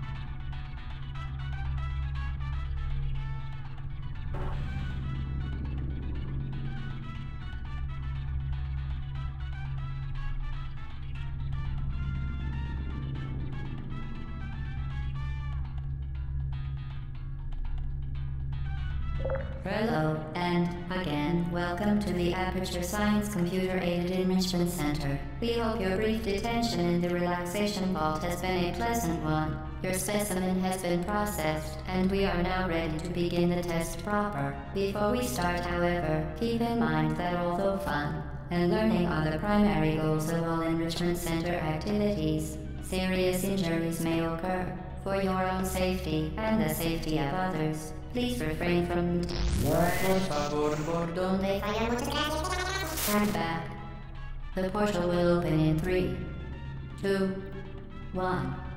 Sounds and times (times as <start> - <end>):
Music: 0.0 - 58.7
Speech: 19.4 - 53.7, 54.6 - 56.2, 57.0 - 57.4, 58.2 - 58.6.